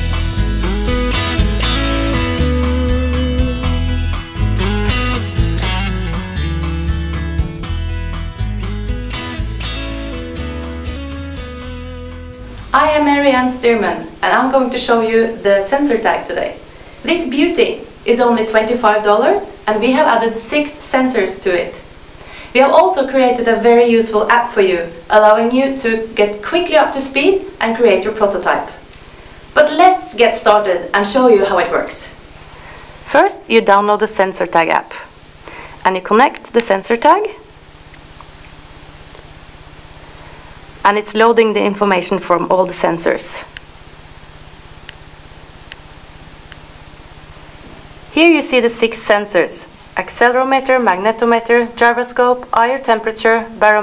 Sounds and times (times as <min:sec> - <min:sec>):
Music: 0:00.0 - 0:14.8
Speech: 0:12.7 - 0:21.8, 0:22.6 - 0:28.8, 0:29.6 - 0:32.2, 0:33.1 - 0:35.1, 0:35.8 - 0:37.5, 0:40.9 - 0:43.5, 0:48.2 - 0:53.8.